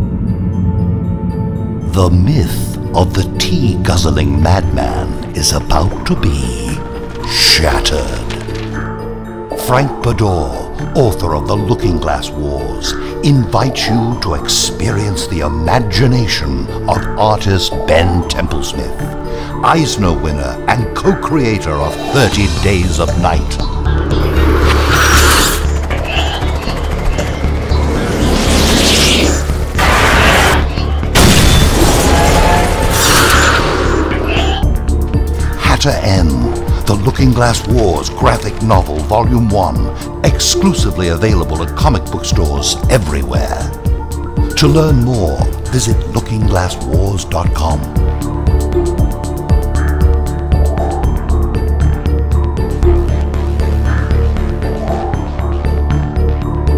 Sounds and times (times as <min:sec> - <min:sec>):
Music: 0:00.0 - 0:56.7
Speech: 0:01.9 - 0:08.3, 0:09.6 - 0:19.0, 0:19.6 - 0:23.6, 0:35.6 - 0:43.8, 0:44.6 - 0:48.0.